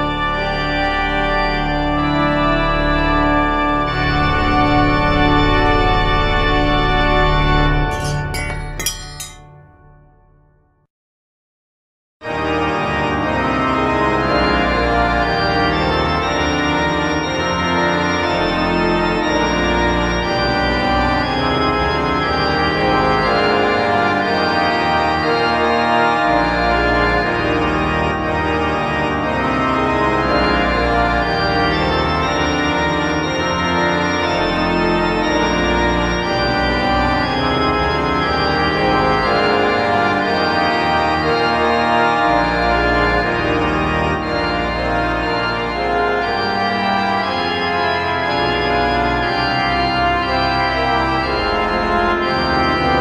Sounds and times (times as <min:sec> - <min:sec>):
Music: 0:00.0 - 0:10.9, 0:12.2 - 0:53.0.